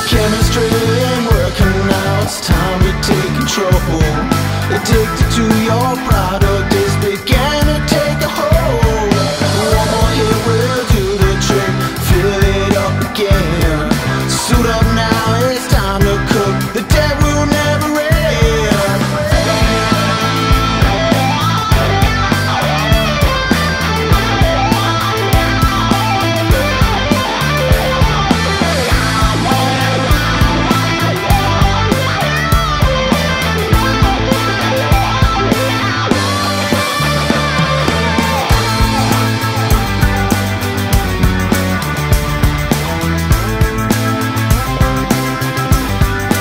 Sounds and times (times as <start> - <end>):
Musical instrument: 0.0 - 13.7, 14.7 - 46.4
Rock music: 0.0 - 46.4.